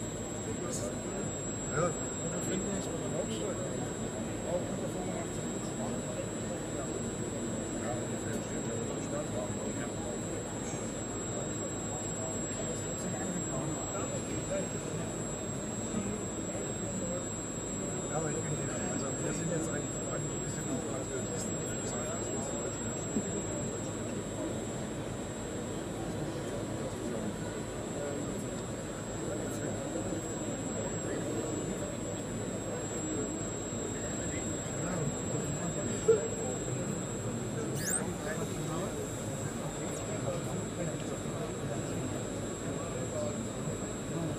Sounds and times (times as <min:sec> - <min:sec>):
Speech: 0:00.0 - 0:44.3.